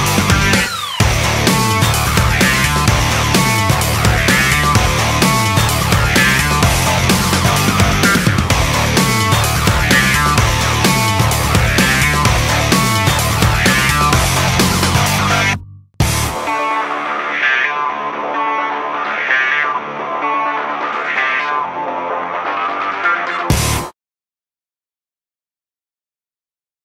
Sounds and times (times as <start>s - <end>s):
Music: 0.0s - 23.9s.